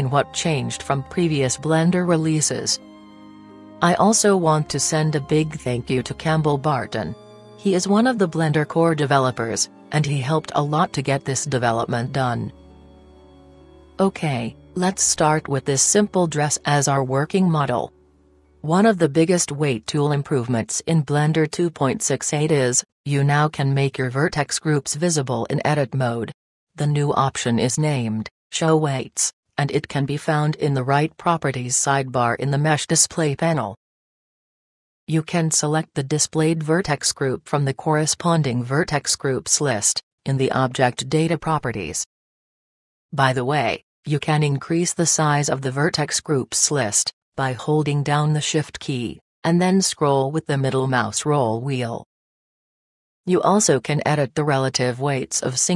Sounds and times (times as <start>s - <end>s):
Speech: 0.0s - 2.8s, 3.8s - 12.5s, 14.0s - 17.9s, 18.7s - 33.8s, 35.1s - 42.1s, 43.2s - 52.1s, 53.3s - 55.7s
Music: 0.0s - 19.6s.